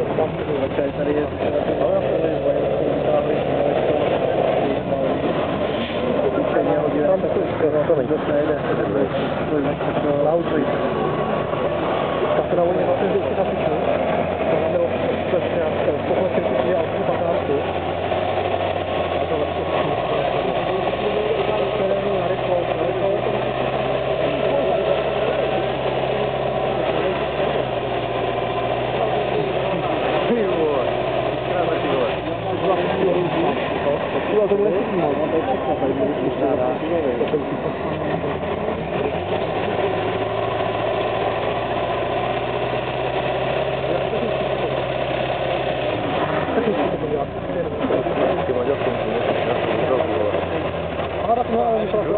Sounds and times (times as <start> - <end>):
Speech: 0.0 - 5.4, 6.0 - 10.9, 12.4 - 17.8, 19.2 - 25.9, 28.9 - 39.1, 43.7 - 44.8, 46.4 - 52.1
Truck: 0.0 - 52.1.